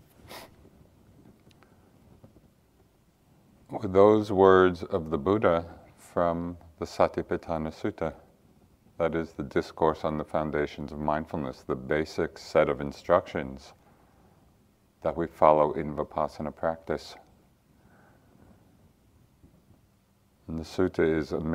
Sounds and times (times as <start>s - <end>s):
Speech: 3.7s - 8.3s, 9.0s - 13.8s, 15.0s - 17.3s, 20.4s - 21.5s.